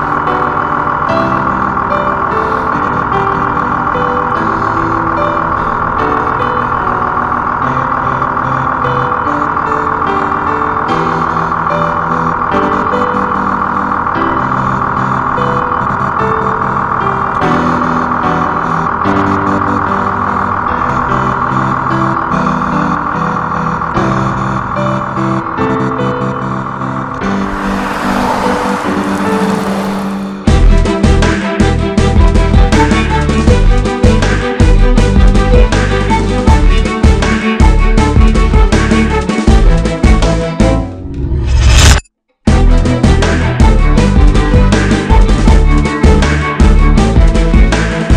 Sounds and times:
Music: 0.0 - 48.1.

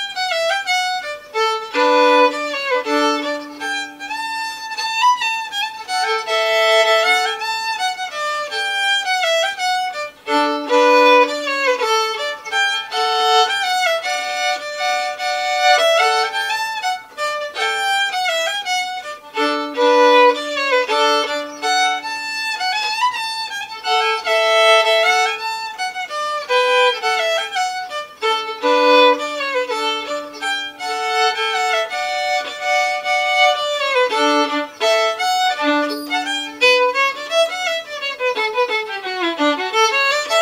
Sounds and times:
Violin, fiddle: 0.0 - 40.4.

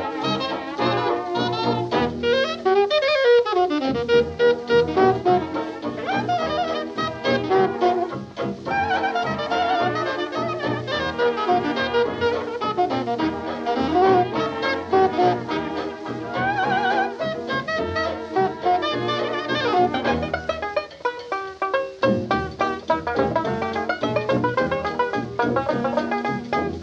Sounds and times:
Music: 0.0 - 26.8.

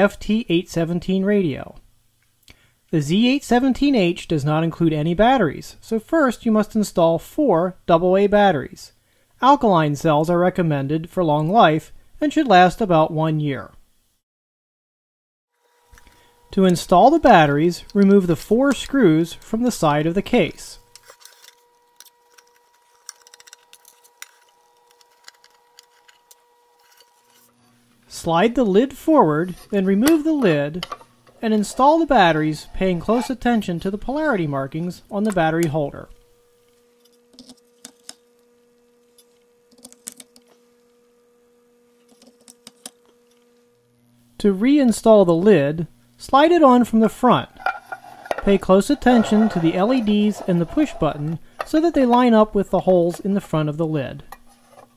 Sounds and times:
Narration, monologue: 0.0 - 13.9, 15.9 - 21.2, 27.9 - 36.9, 44.2 - 54.6.

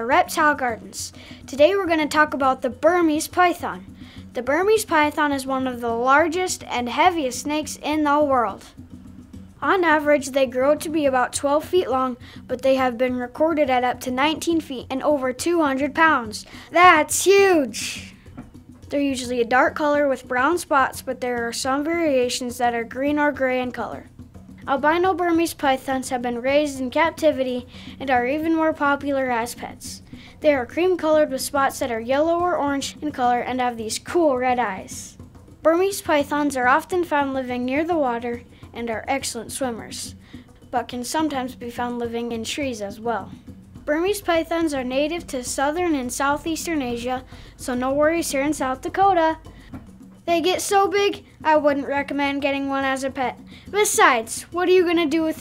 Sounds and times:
Speech: 0.0 - 8.8, 9.6 - 18.1, 18.9 - 24.1, 24.7 - 40.1, 40.7 - 43.3, 43.9 - 49.4, 50.3 - 55.4
Music: 0.0 - 55.4.

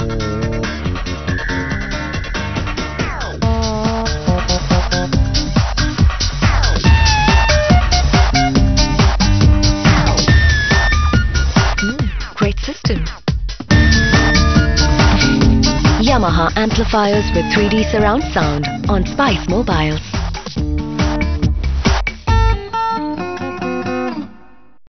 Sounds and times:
Music: 0.0 - 24.8
Speech: 11.8 - 13.2, 16.0 - 20.0.

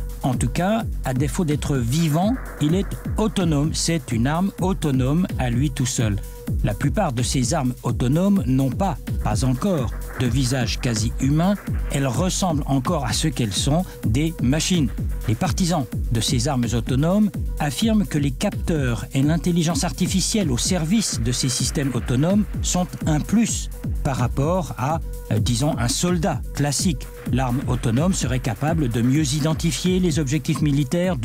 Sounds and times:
Music: 0.0 - 31.2
Speech: 0.2 - 31.2.

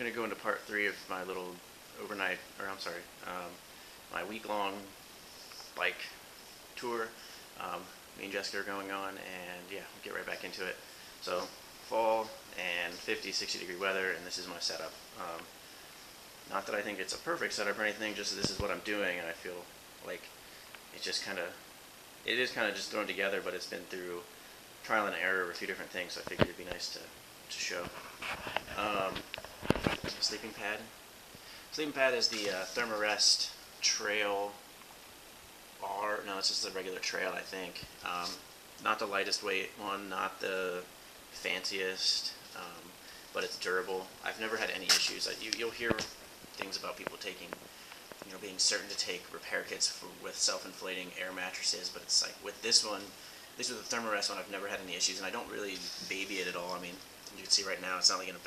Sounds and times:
Speech: 0.0 - 6.2, 6.8 - 15.5, 16.5 - 20.3, 20.9 - 21.6, 22.2 - 31.0, 31.7 - 34.6, 35.8 - 47.6, 48.2 - 58.4.

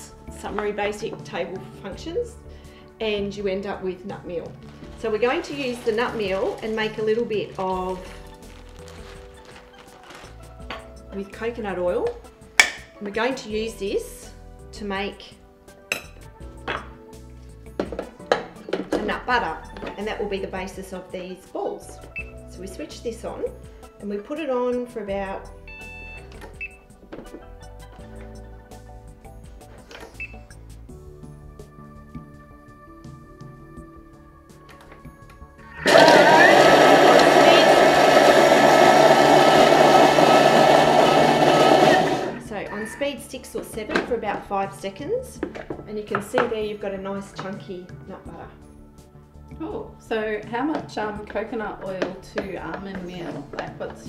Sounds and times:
Music: 0.0 - 54.0
Speech: 3.0 - 8.0, 11.2 - 12.2, 13.0 - 15.3, 18.9 - 25.5, 42.4 - 48.6, 49.6 - 54.0
Blender: 35.8 - 42.4.

